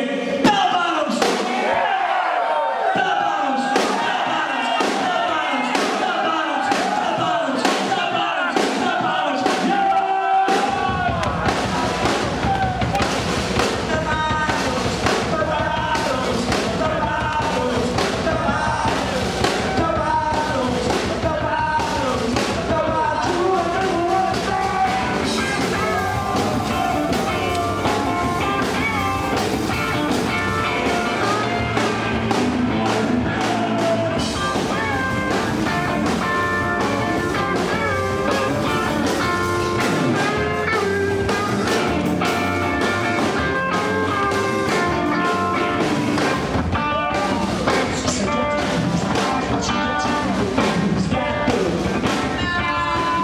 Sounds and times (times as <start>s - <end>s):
Music: 2.9s - 53.2s.